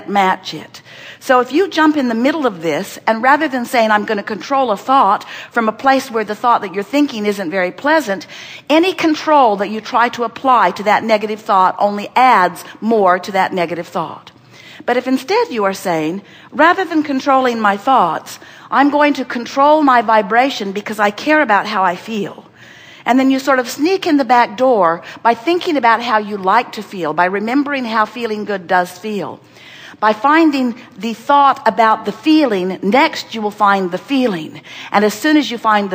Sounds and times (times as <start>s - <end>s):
Speech: 0.0s - 14.3s, 14.9s - 22.4s, 23.1s - 29.4s, 30.0s - 35.9s.